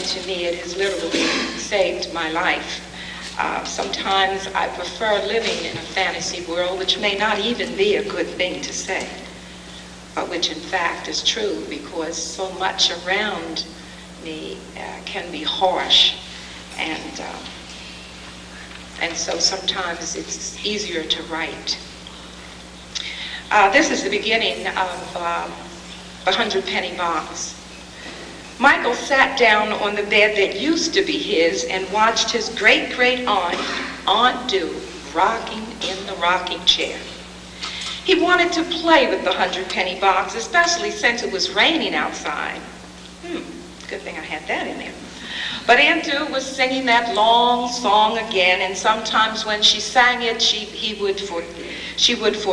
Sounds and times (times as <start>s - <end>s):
Speech: 0.0s - 9.3s, 10.2s - 17.5s, 19.0s - 21.8s, 23.5s - 27.6s, 28.6s - 37.2s, 38.1s - 45.0s, 45.7s - 52.5s.